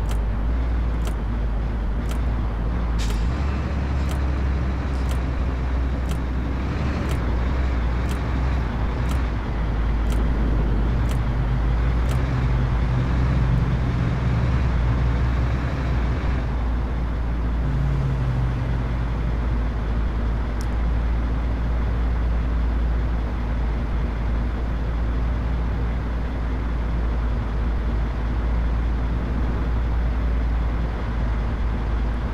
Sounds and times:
Car: 0:00.0 - 0:32.3.

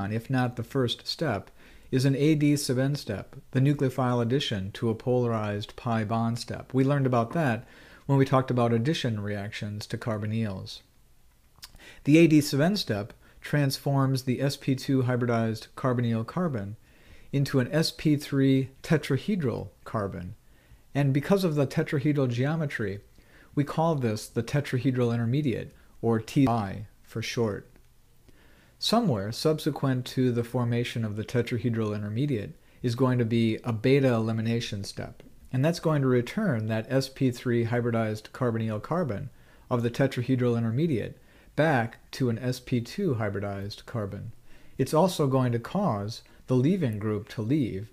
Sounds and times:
Speech: 0:00.0 - 0:10.9, 0:11.6 - 0:27.8, 0:28.8 - 0:47.9.

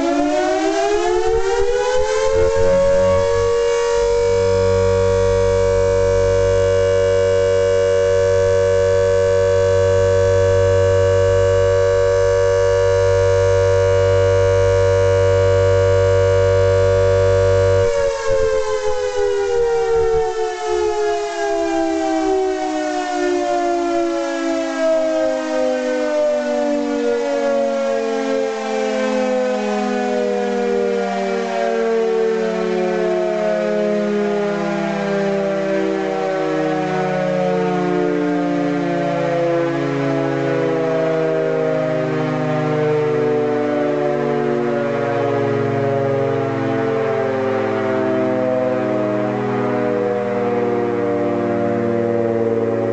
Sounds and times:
Civil defense siren: 0:00.0 - 0:52.9.

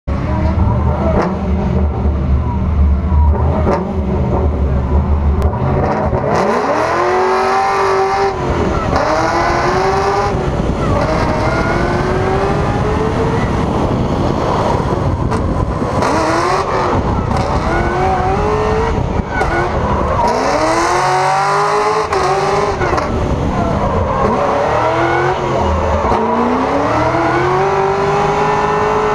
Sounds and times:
Race car, auto racing: 0:00.0 - 0:29.1.

